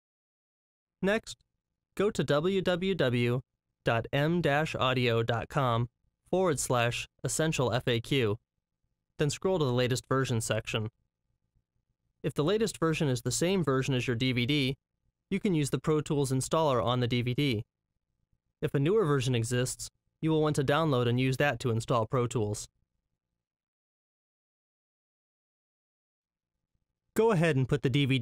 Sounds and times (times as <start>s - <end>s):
Speech: 1.0s - 1.4s, 2.0s - 8.4s, 9.2s - 10.9s, 12.3s - 17.7s, 18.6s - 22.7s, 27.2s - 28.2s.